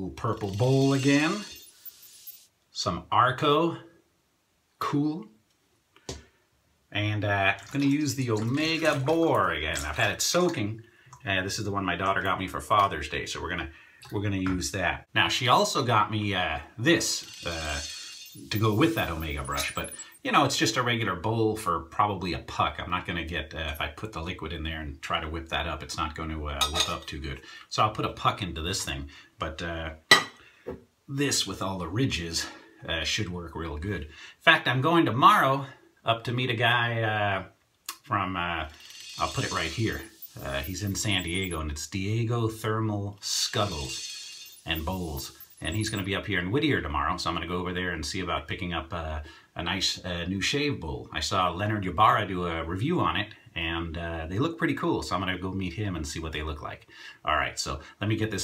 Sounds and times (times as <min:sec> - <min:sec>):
Speech: 0:00.0 - 0:01.6, 0:02.7 - 0:03.9, 0:04.8 - 0:05.4, 0:06.9 - 0:30.0, 0:31.1 - 0:44.0, 0:44.7 - 0:58.4.